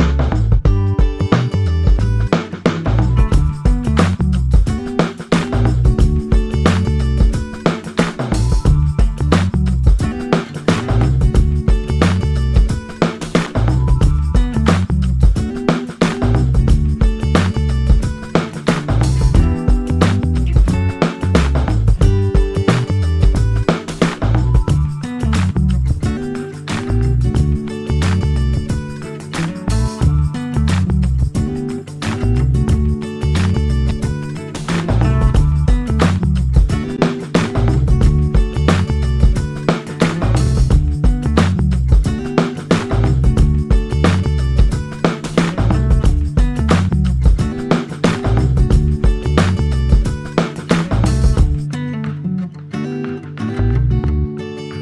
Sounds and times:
Music: 0:00.0 - 0:54.8.

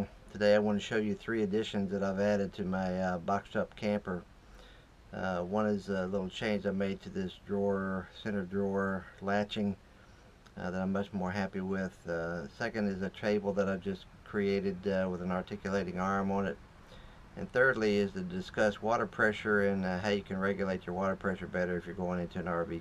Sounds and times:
Speech: 0:00.0 - 0:04.3, 0:05.1 - 0:09.8, 0:10.5 - 0:16.6, 0:17.4 - 0:22.8.

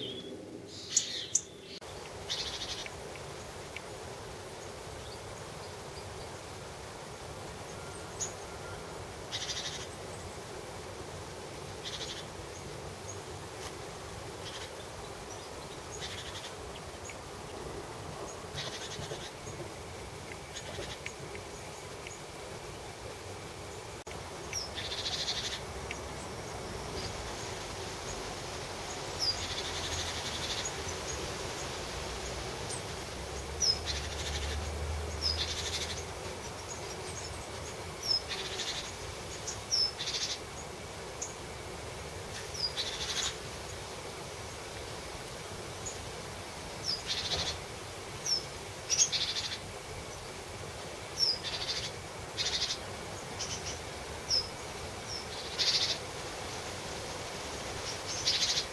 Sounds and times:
Bird: 0:00.0 - 0:03.0, 0:07.7 - 0:10.4, 0:11.8 - 0:12.3, 0:14.4 - 0:17.2, 0:18.2 - 0:19.6, 0:32.7 - 0:41.4, 0:46.8 - 0:47.6, 0:51.2 - 0:56.0, 0:57.9 - 0:58.7.

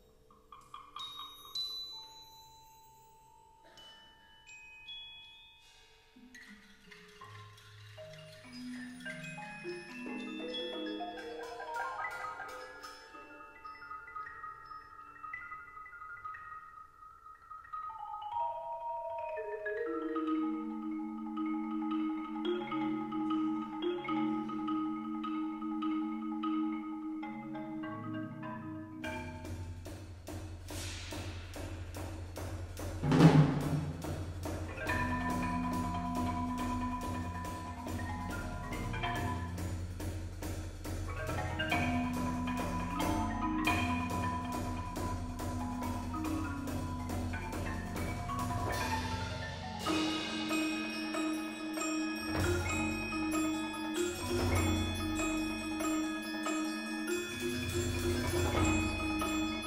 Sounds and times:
Percussion: 0:00.0 - 0:59.6.

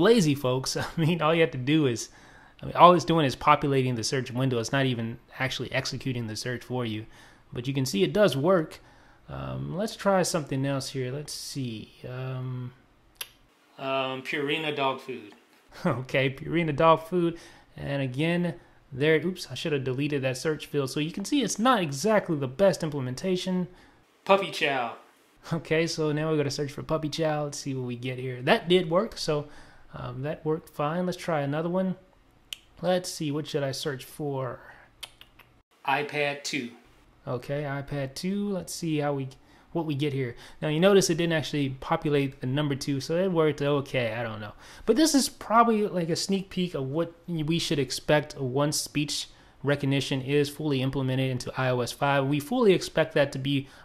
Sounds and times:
Speech: 0:00.0 - 0:12.8, 0:13.8 - 0:32.0, 0:32.8 - 0:34.8, 0:35.8 - 0:53.7.

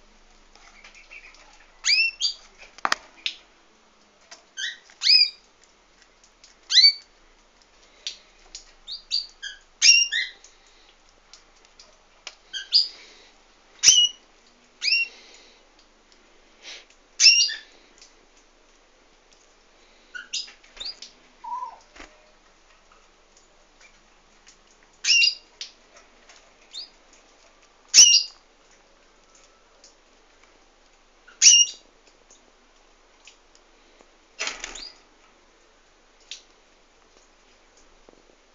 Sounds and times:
Bird: 0:20.2 - 0:22.2
Domestic animals, pets: 0:21.4 - 0:22.2.

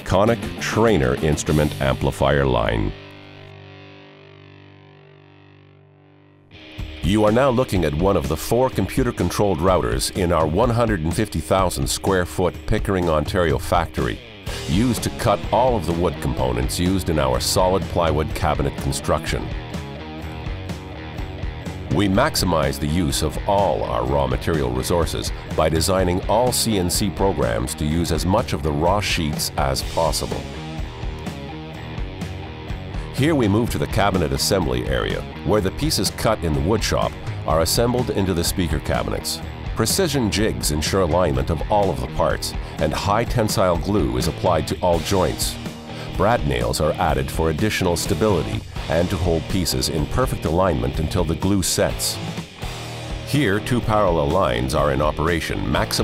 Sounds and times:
Speech: 0:00.0 - 0:03.0, 0:07.0 - 0:19.6, 0:21.9 - 0:30.6, 0:33.1 - 0:52.2, 0:53.3 - 0:56.0
Music: 0:00.0 - 0:56.0.

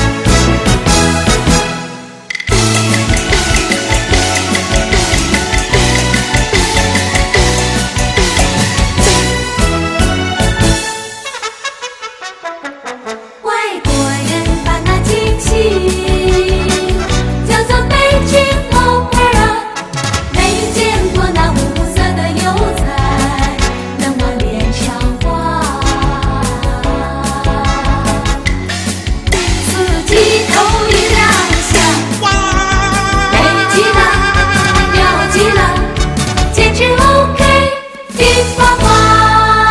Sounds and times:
Music: 0:00.0 - 0:39.7
Female singing: 0:13.5 - 0:19.6, 0:20.4 - 0:28.2, 0:33.3 - 0:36.0.

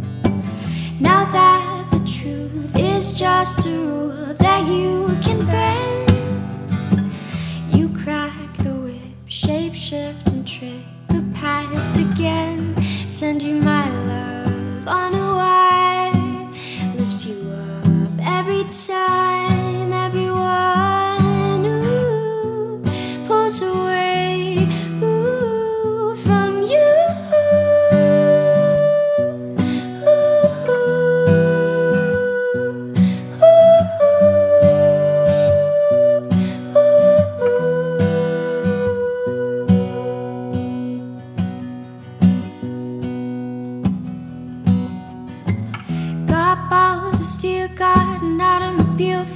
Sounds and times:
Music: 0:00.0 - 0:49.3.

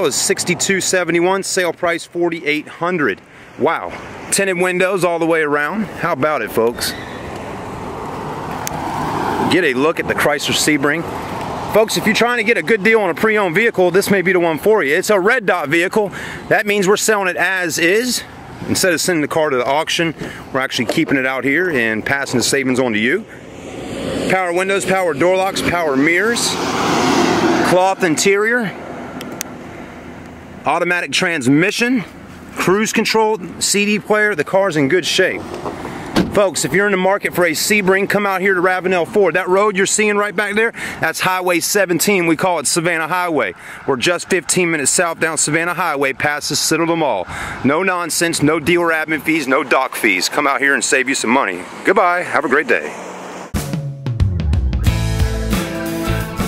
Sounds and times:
Speech: 0:00.0 - 0:07.0, 0:09.5 - 0:11.1, 0:11.7 - 0:23.3, 0:24.3 - 0:26.6, 0:27.6 - 0:28.8, 0:30.6 - 0:35.4, 0:36.2 - 0:53.0
Car: 0:00.0 - 0:53.6.

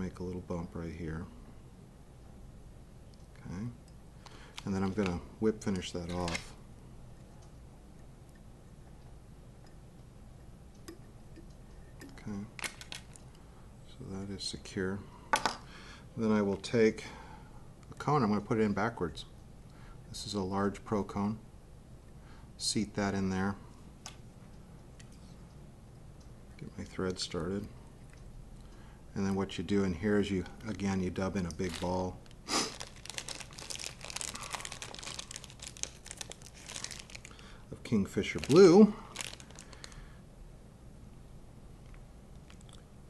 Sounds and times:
Speech: 0:00.0 - 0:01.4, 0:03.4 - 0:03.8, 0:04.6 - 0:06.6, 0:12.2 - 0:12.6, 0:13.9 - 0:15.1, 0:16.2 - 0:17.2, 0:17.9 - 0:19.4, 0:20.1 - 0:21.4, 0:22.6 - 0:23.6, 0:26.6 - 0:27.8, 0:29.1 - 0:32.2, 0:37.7 - 0:39.1
Crumpling, crinkling: 0:05.8 - 0:06.6, 0:12.2 - 0:13.4, 0:30.6 - 0:40.1.

